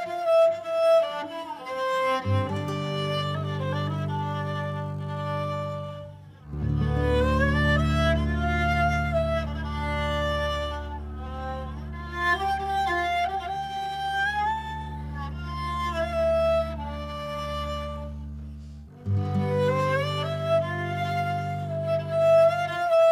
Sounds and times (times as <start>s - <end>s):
Violin, fiddle: 0.0s - 23.1s.